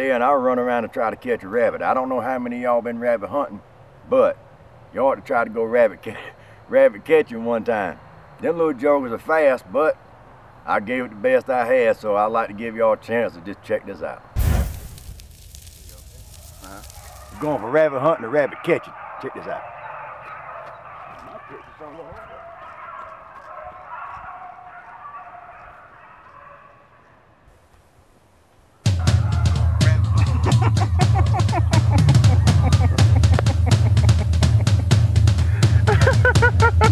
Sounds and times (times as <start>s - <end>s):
Speech: 17.4s - 19.7s, 21.2s - 22.9s
Bow-wow: 18.2s - 27.1s.